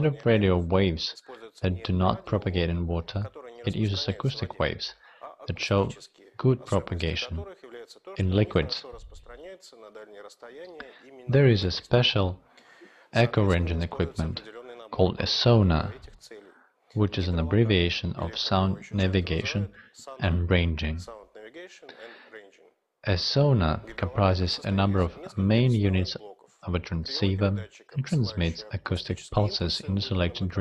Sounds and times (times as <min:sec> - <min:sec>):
Speech: 0:00.0 - 0:30.6.